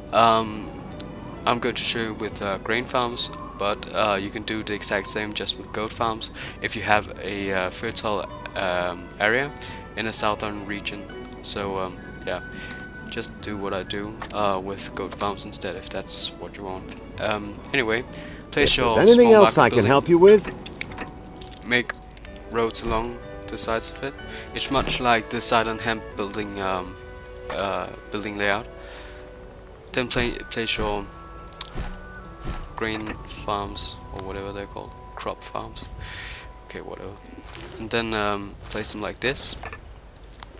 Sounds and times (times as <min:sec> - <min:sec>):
Music: 0:00.0 - 0:40.5
Speech: 0:00.1 - 0:00.8, 0:01.5 - 0:12.4, 0:13.1 - 0:20.5, 0:21.6 - 0:28.7, 0:30.0 - 0:31.1, 0:32.8 - 0:35.9, 0:36.7 - 0:37.2, 0:37.8 - 0:39.6.